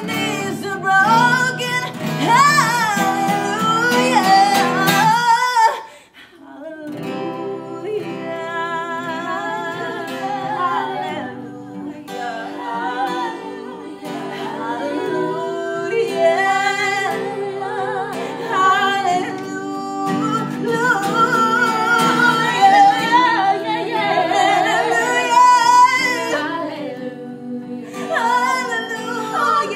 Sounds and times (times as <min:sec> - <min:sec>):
Music: 0:00.0 - 0:05.8, 0:06.7 - 0:29.7
Inside, small room: 0:00.0 - 0:29.7
Singing: 0:00.0 - 0:29.7.